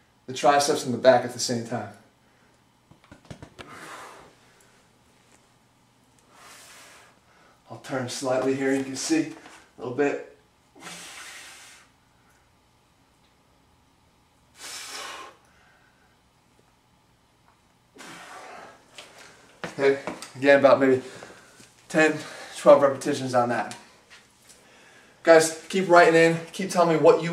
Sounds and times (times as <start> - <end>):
Speech: 0.3 - 2.0, 7.7 - 10.4, 19.8 - 21.1, 21.9 - 23.8, 25.2 - 27.3.